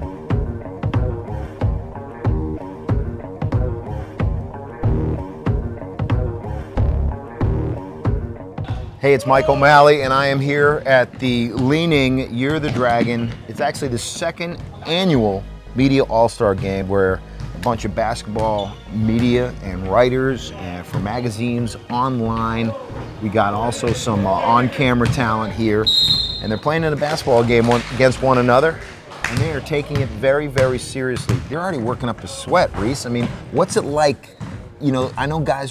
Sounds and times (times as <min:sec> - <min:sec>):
Speech: 0:09.0 - 0:35.7.